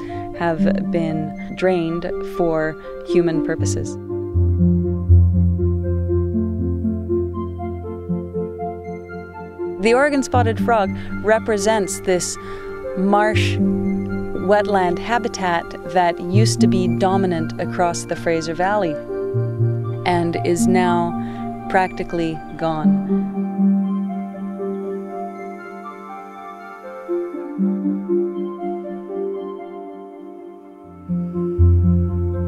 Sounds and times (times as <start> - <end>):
Music: 0.0 - 32.4
Speech: 0.4 - 4.0, 9.8 - 12.4, 13.0 - 13.6, 14.4 - 19.0, 20.1 - 23.0.